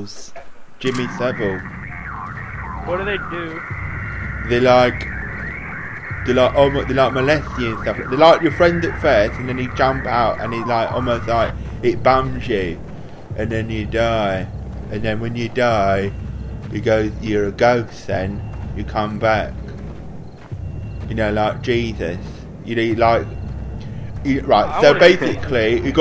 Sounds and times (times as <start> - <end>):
Speech: 0.0 - 1.6, 2.9 - 3.6, 4.5 - 5.1, 6.3 - 12.8, 13.4 - 19.6, 21.1 - 23.4, 24.2 - 26.0.